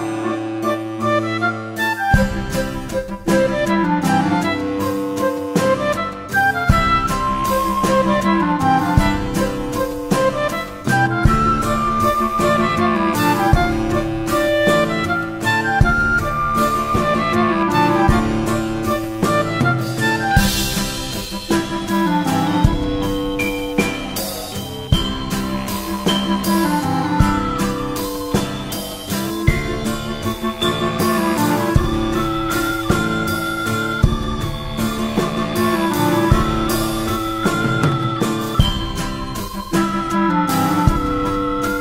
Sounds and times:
Guitar: 0.0s - 41.8s.

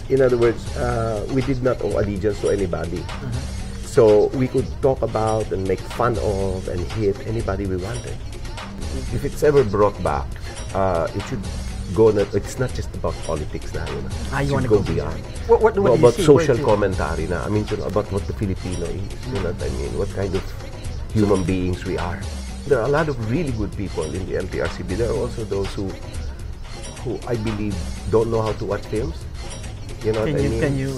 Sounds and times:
Music: 0.0s - 30.9s
Speech: 0.1s - 8.2s, 9.0s - 20.5s, 21.2s - 26.0s, 27.0s - 29.2s, 30.0s - 30.9s.

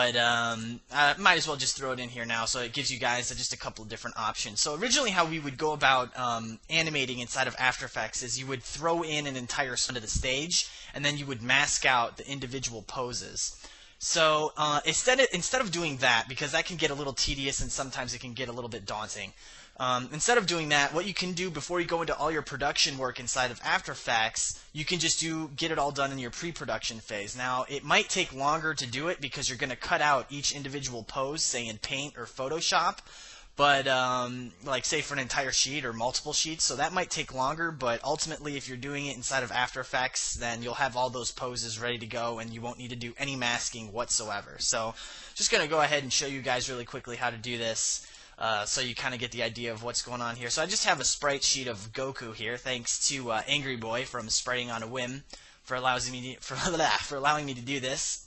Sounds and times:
Speech: 0.0s - 58.2s.

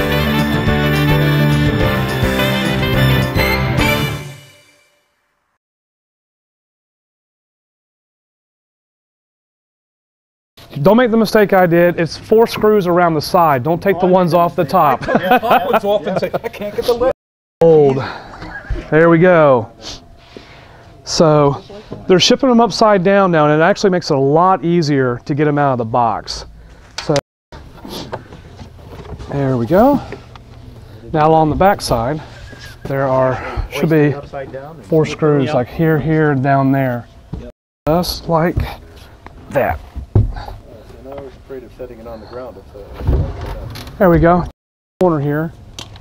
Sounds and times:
Speech: 10.7s - 15.0s, 21.1s - 27.2s, 29.3s - 30.1s, 31.0s - 32.3s, 32.9s - 38.8s, 39.5s - 39.8s, 40.6s - 45.5s.

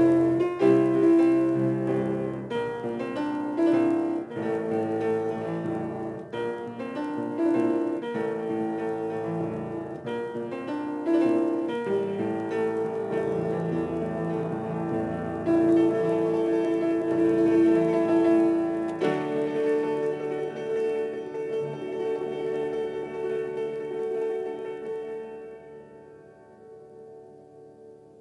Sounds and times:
Inside, small room: 0.0s - 28.2s
Piano: 0.0s - 28.2s.

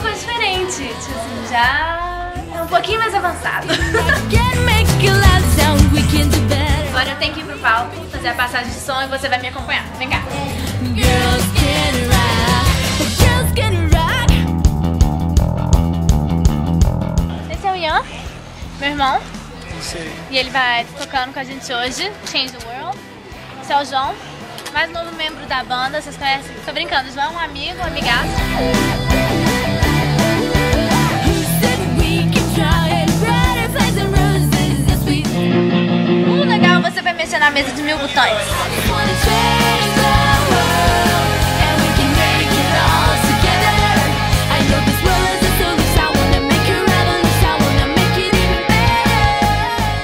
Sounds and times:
Music: 0.0s - 50.0s.

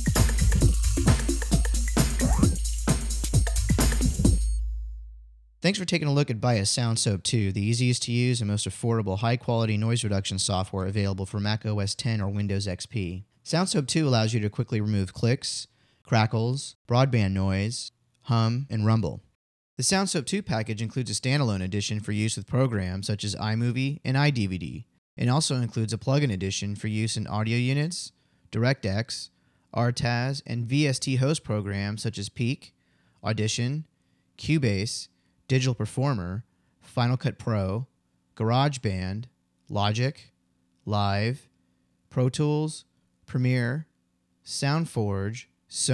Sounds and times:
Speech: 5.6s - 41.5s, 42.1s - 45.9s.

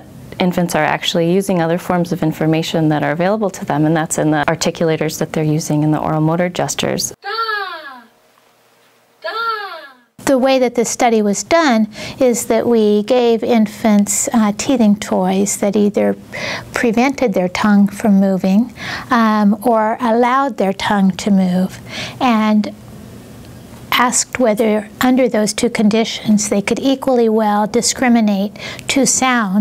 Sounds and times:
Narration, monologue: 0.0s - 29.6s
Female speech, woman speaking: 0.4s - 7.9s, 9.4s - 16.2s, 16.8s - 22.8s, 23.9s - 29.6s.

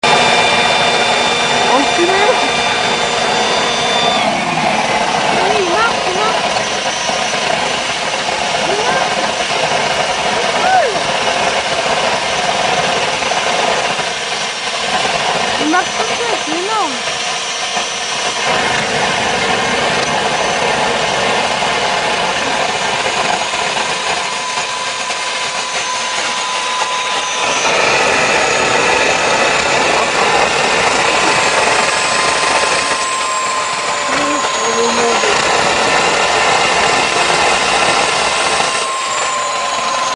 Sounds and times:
Speech: 1.7s - 2.5s, 5.4s - 6.4s, 15.6s - 17.0s, 34.1s - 35.4s.

